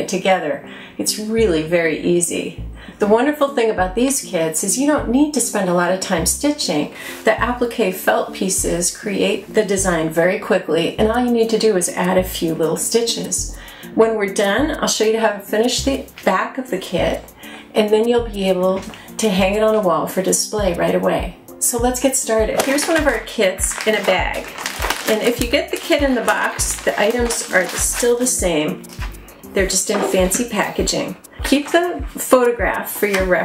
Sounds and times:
Speech: 0.0 - 28.8, 29.6 - 33.4
Music: 0.0 - 33.4.

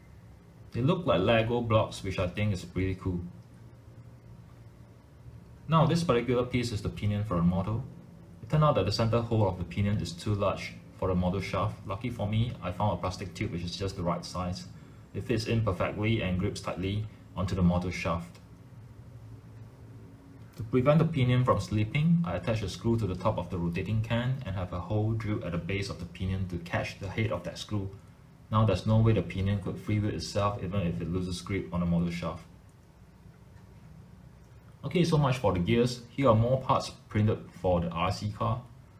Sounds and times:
Speech: 0.7 - 3.4, 5.7 - 18.5, 20.6 - 32.6, 34.8 - 38.8.

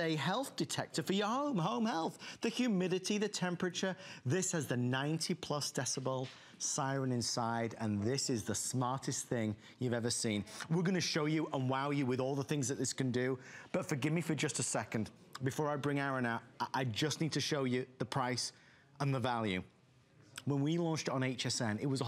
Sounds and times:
Speech: 0.0 - 22.0.

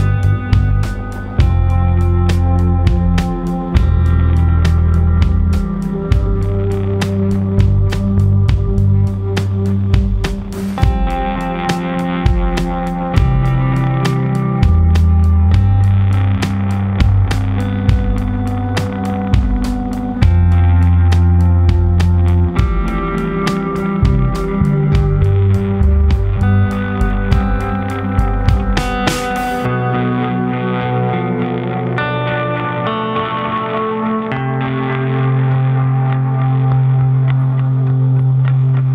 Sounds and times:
Music: 0.0 - 38.9.

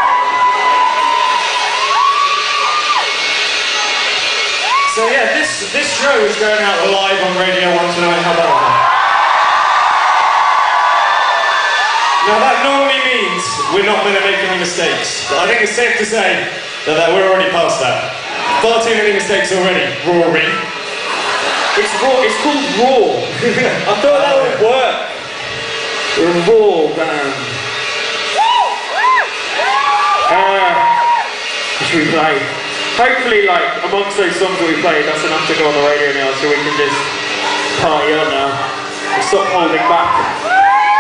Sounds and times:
Speech: 4.9 - 8.6, 12.3 - 20.7, 21.8 - 25.1, 26.2 - 27.6, 30.3 - 30.9, 31.8 - 37.1, 37.8 - 40.3.

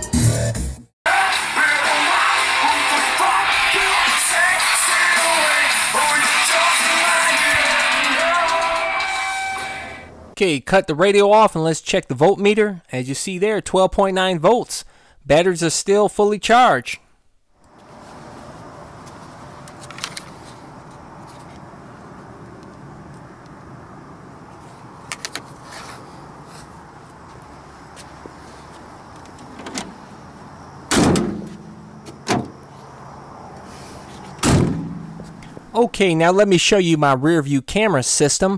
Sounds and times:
Vehicle: 3.2 - 10.4, 17.6 - 35.9.

